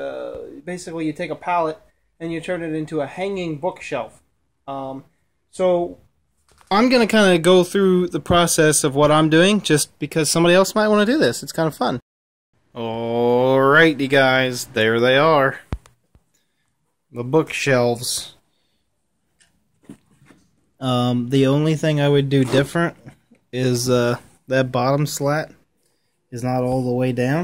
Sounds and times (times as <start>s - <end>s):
Speech: 0.0s - 6.1s, 6.7s - 12.0s, 12.7s - 15.7s, 17.1s - 18.4s, 20.8s - 25.6s, 26.3s - 27.4s.